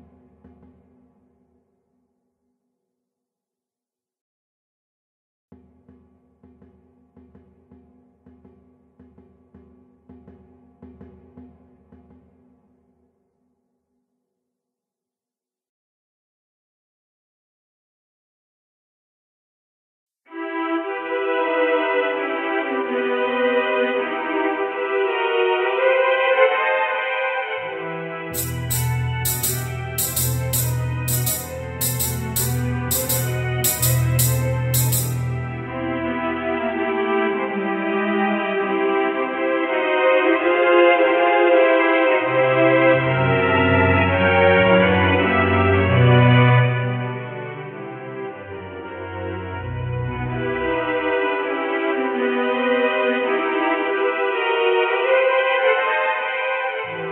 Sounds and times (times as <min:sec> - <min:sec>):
Percussion: 0:05.6 - 0:13.2, 0:28.4 - 0:35.7.